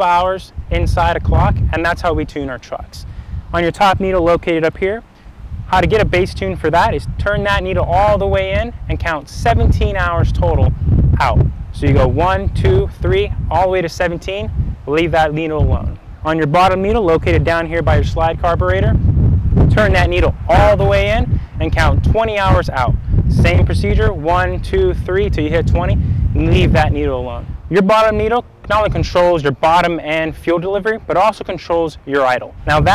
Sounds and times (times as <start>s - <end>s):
Speech: 0.0s - 5.0s, 5.7s - 19.0s, 19.7s - 32.9s.